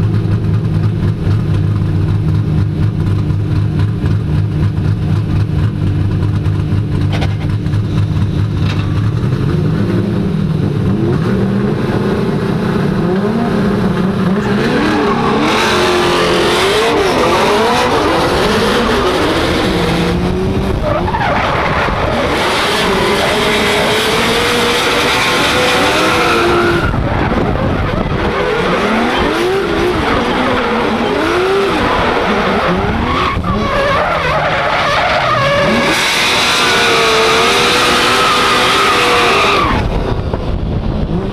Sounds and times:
Car: 0.0 - 41.3.

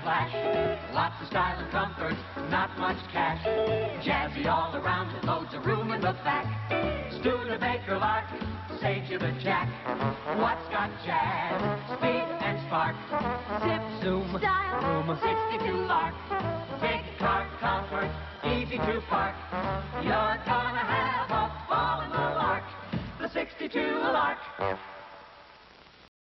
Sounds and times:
Music: 0.0 - 25.4.

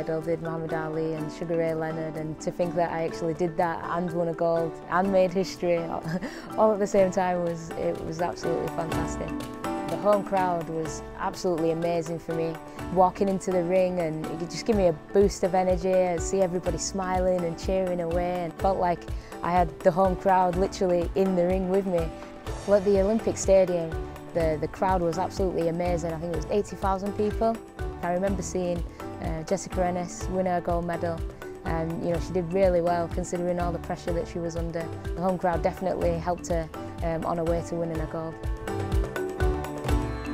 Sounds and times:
Speech: 0.0 - 22.1, 22.7 - 38.4
Music: 0.0 - 40.3.

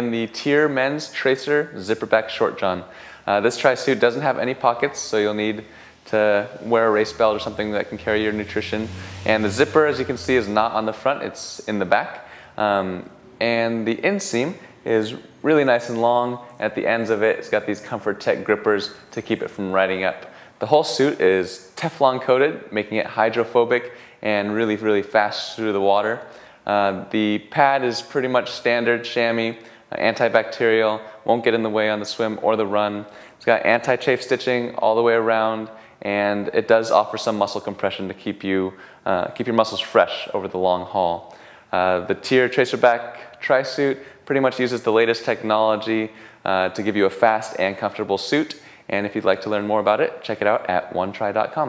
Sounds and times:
Speech: 0.0 - 51.6.

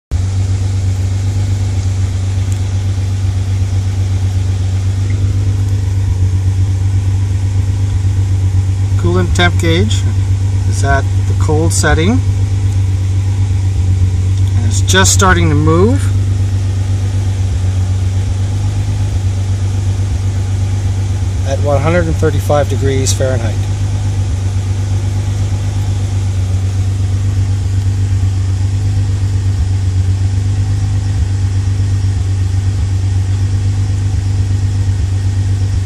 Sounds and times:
Car: 0.1 - 35.8
Speech: 9.0 - 12.3, 14.5 - 16.2, 21.4 - 23.6.

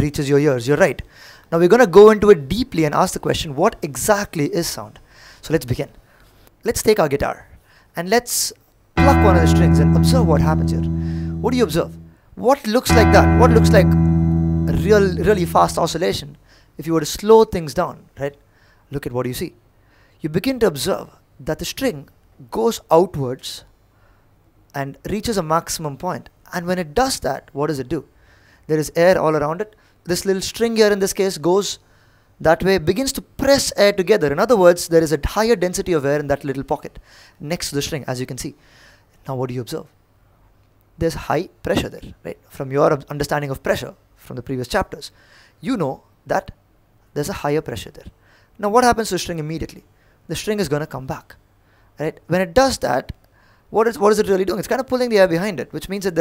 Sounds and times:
Speech: 0.0 - 6.0, 6.6 - 13.9, 14.7 - 19.6, 20.2 - 23.6, 24.7 - 28.1, 28.7 - 31.8, 32.4 - 38.6, 39.2 - 40.0, 41.0 - 51.4, 52.0 - 56.2.

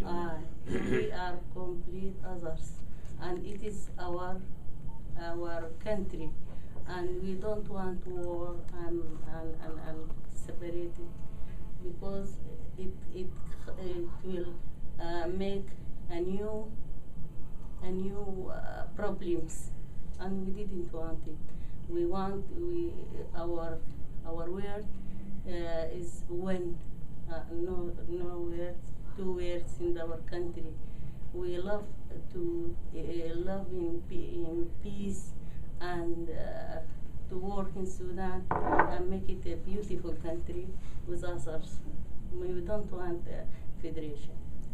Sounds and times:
Speech: 0.0 - 4.5, 5.2 - 11.1, 11.8 - 16.7, 17.8 - 24.9, 25.5 - 30.8, 31.4 - 44.4.

